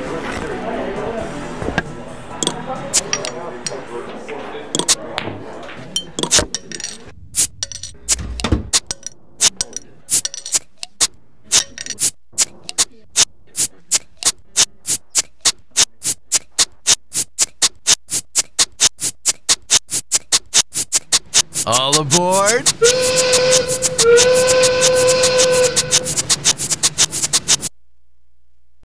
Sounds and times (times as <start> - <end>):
Speech: 0.0 - 7.1, 21.6 - 22.7.